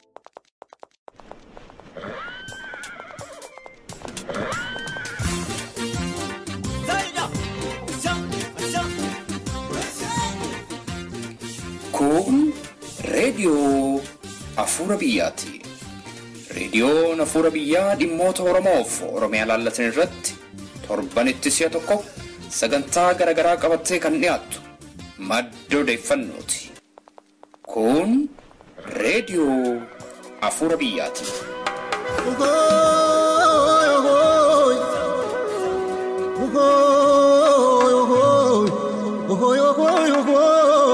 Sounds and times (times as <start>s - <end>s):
Music: 3.2s - 26.8s, 28.9s - 40.9s
Speech: 6.8s - 9.0s, 11.9s - 15.7s, 16.5s - 24.6s, 25.2s - 26.8s, 27.7s - 28.3s, 28.9s - 31.3s.